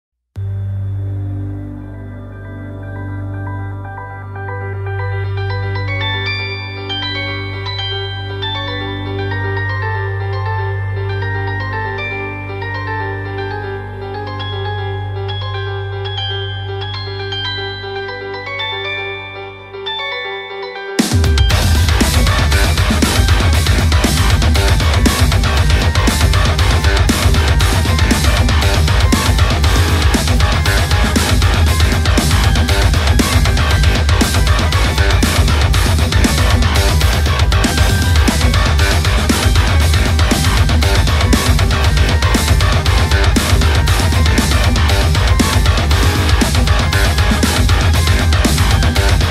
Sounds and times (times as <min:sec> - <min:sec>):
Music: 0:00.4 - 0:49.3.